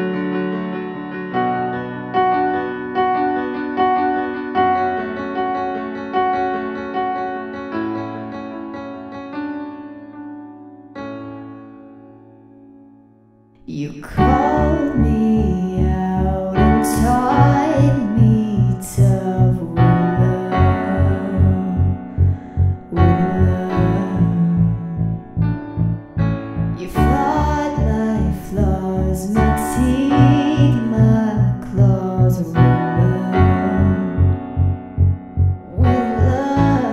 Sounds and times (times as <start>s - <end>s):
Music: 0.0s - 36.9s
Female singing: 13.7s - 21.9s, 22.9s - 24.8s, 26.8s - 34.2s, 35.7s - 36.9s.